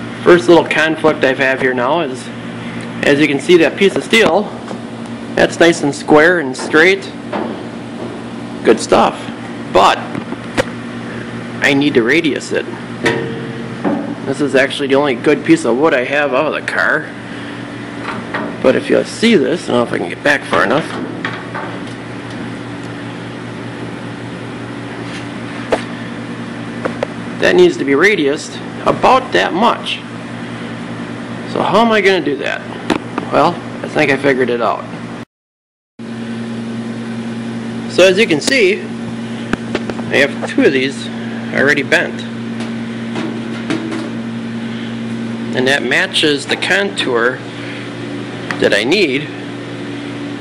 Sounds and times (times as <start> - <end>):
Speech: 0.2 - 2.4, 3.0 - 4.6, 5.4 - 7.2, 8.6 - 10.1, 11.6 - 12.8, 14.3 - 17.1, 18.6 - 21.0, 27.4 - 30.1, 31.5 - 32.7, 33.3 - 34.9, 37.9 - 38.9, 40.1 - 42.4, 45.6 - 47.4, 48.5 - 49.4.